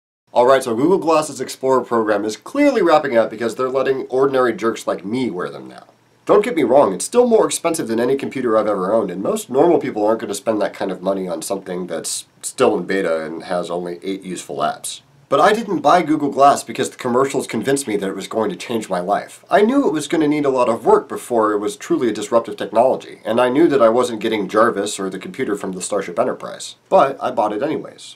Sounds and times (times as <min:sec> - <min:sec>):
Speech: 0:00.3 - 0:28.1.